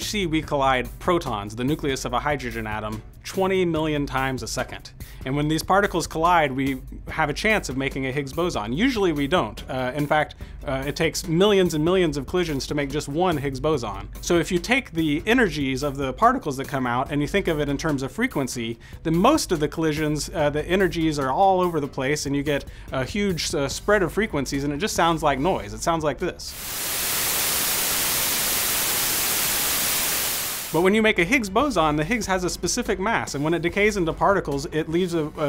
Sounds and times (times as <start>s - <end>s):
Music: 0.0s - 26.6s, 30.7s - 35.4s
Speech: 0.0s - 26.6s, 30.8s - 35.4s.